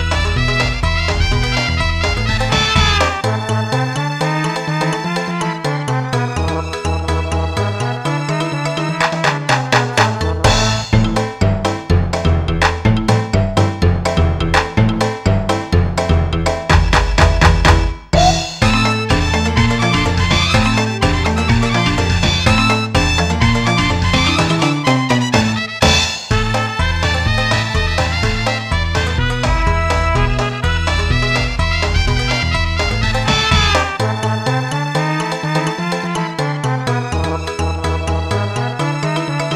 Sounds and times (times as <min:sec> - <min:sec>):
Music: 0:00.0 - 0:39.5.